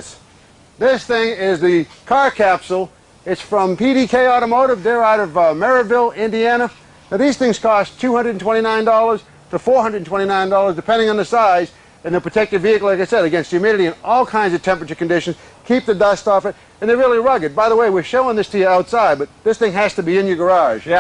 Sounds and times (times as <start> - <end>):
Speech: 0.0 - 0.2, 0.8 - 21.0.